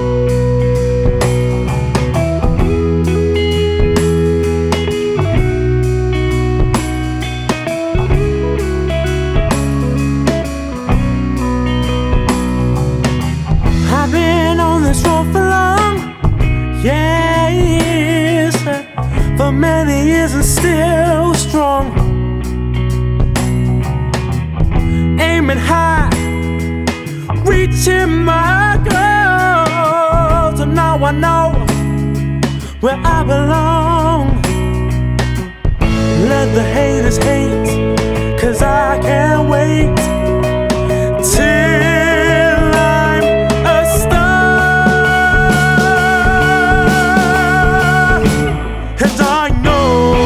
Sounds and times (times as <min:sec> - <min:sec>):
Music: 0:00.0 - 0:50.2.